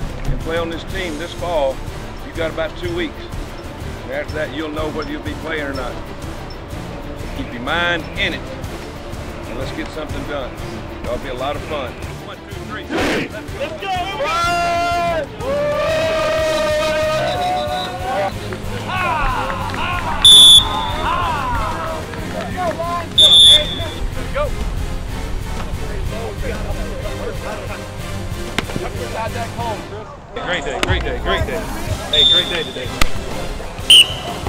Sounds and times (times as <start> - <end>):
Music: 0.0 - 34.4
Speech: 0.3 - 3.3, 4.1 - 6.0, 7.4 - 8.4, 9.5 - 15.2, 25.8 - 27.8, 28.7 - 33.8.